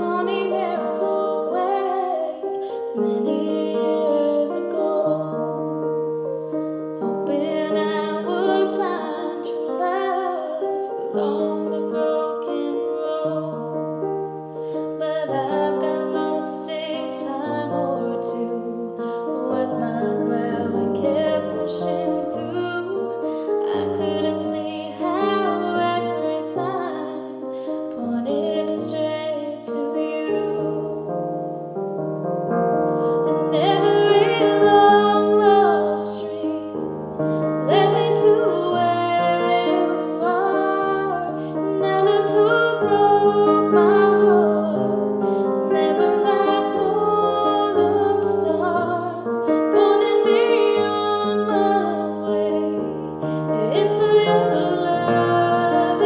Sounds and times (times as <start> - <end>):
Female singing: 0.0 - 5.5, 7.2 - 13.7, 15.0 - 31.1, 33.2 - 36.8, 37.6 - 56.0
Music: 0.0 - 56.0.